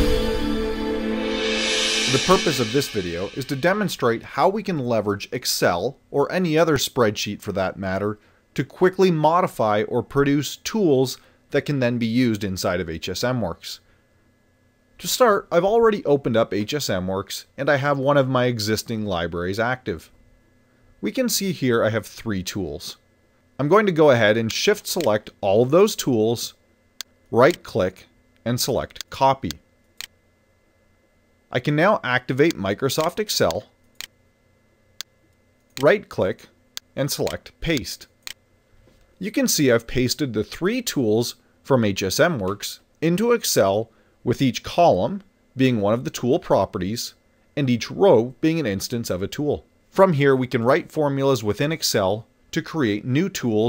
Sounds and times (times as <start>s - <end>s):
Speech: 2.1s - 13.8s, 15.0s - 20.2s, 21.0s - 23.0s, 23.6s - 26.6s, 27.3s - 29.6s, 31.5s - 33.7s, 35.8s - 38.1s, 39.2s - 53.6s.